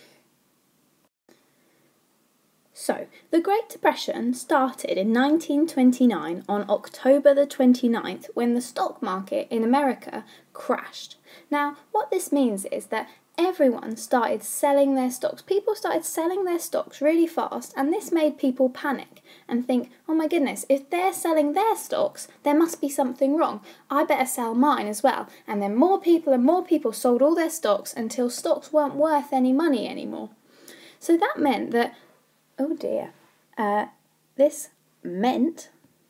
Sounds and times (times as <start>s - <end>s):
Speech: 2.8s - 30.4s, 31.0s - 32.0s, 32.6s - 35.8s.